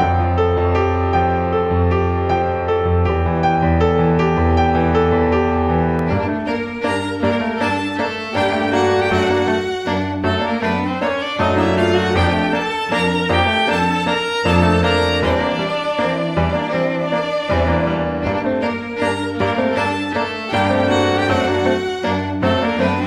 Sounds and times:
Music: 0.0s - 23.0s.

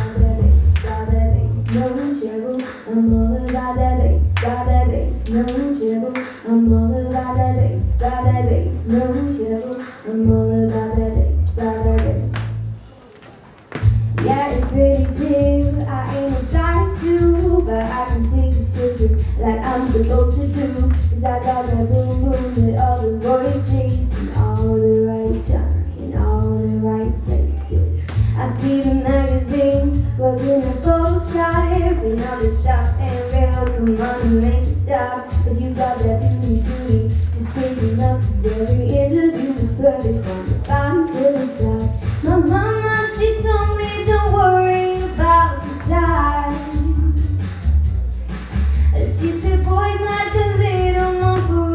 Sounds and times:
Female singing: 0.0s - 12.6s, 14.2s - 47.3s, 48.9s - 51.7s
Music: 0.0s - 51.7s.

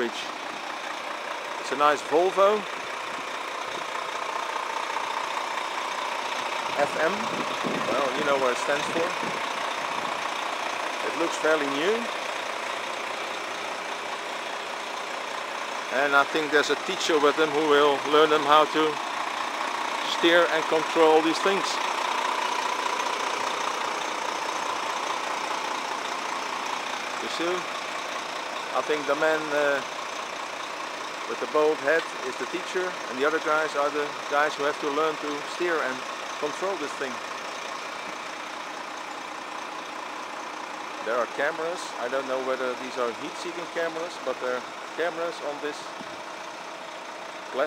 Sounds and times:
Speech: 0.0s - 0.3s, 1.6s - 2.7s, 6.8s - 7.3s, 7.9s - 9.3s, 11.0s - 12.1s, 15.9s - 19.0s, 20.0s - 21.8s, 27.2s - 27.7s, 28.7s - 29.8s, 31.3s - 37.2s, 41.0s - 45.9s.

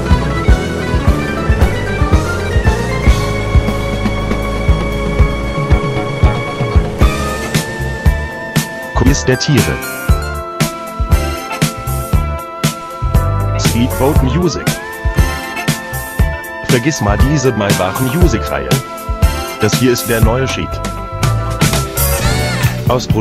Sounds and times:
Background music: 0.0s - 23.2s
Speech: 9.0s - 9.9s, 13.6s - 14.8s, 16.7s - 18.8s, 19.6s - 20.8s, 22.8s - 23.2s.

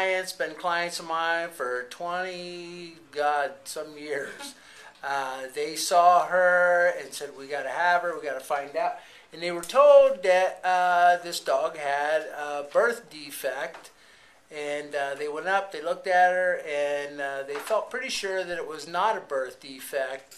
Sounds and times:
Speech: 0.0s - 13.9s, 14.5s - 20.3s.

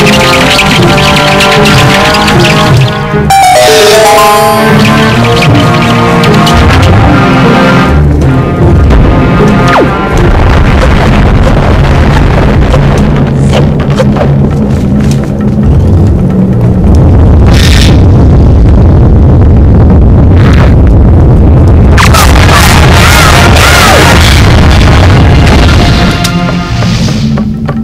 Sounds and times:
Music: 0.0s - 27.8s.

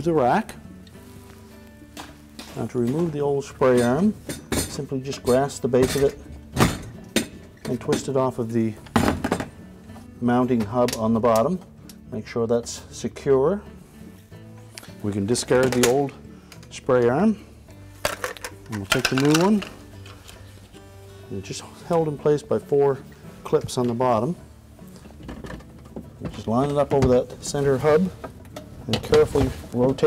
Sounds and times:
Music: 0.0s - 30.0s
Speech: 2.6s - 6.2s, 7.7s - 8.8s, 10.2s - 13.6s, 15.0s - 17.4s, 21.3s - 24.4s, 26.2s - 28.1s, 28.9s - 30.0s.

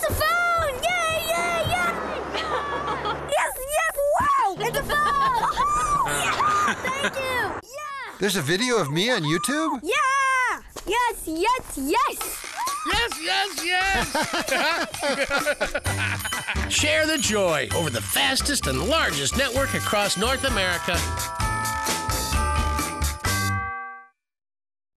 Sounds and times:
Jingle bell: 12.9s - 23.9s.

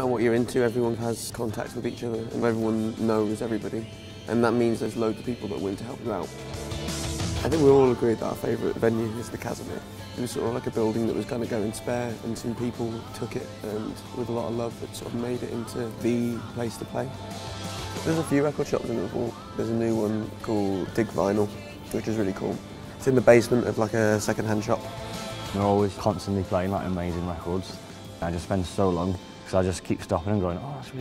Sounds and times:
Speech: 0.0s - 6.3s, 7.4s - 17.2s, 18.0s - 24.8s, 25.5s - 31.0s
Exciting music: 3.8s - 29.7s.

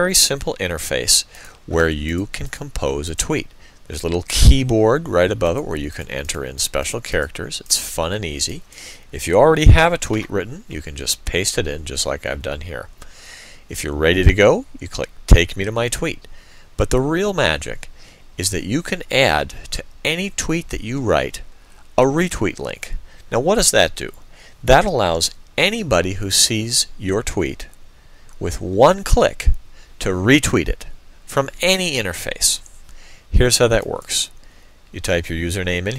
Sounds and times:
Speech: 0.0s - 12.9s, 13.7s - 27.8s, 28.4s - 32.7s, 33.3s - 35.9s.

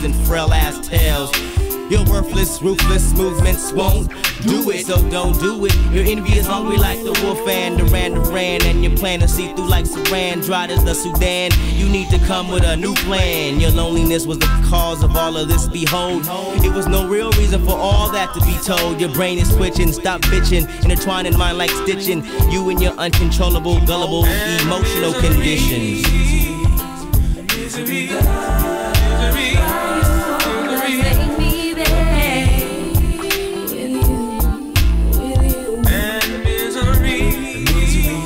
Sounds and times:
Hip hop music: 0.0s - 38.2s
Reggae: 0.0s - 38.2s.

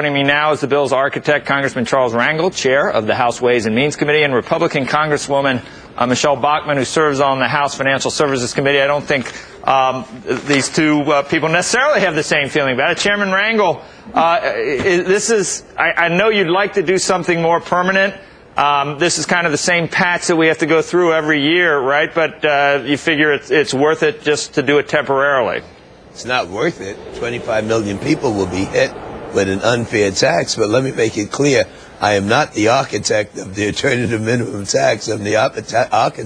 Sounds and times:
Speech: 0.0s - 36.2s.

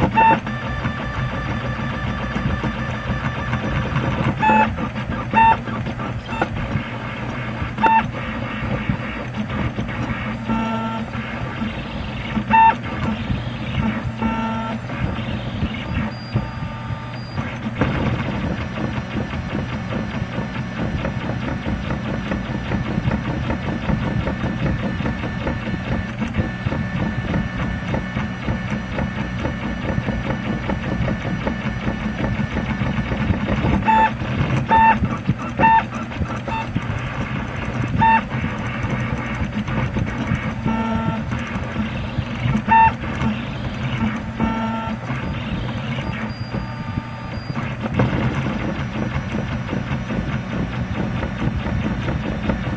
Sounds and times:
Printer: 0.0s - 52.7s.

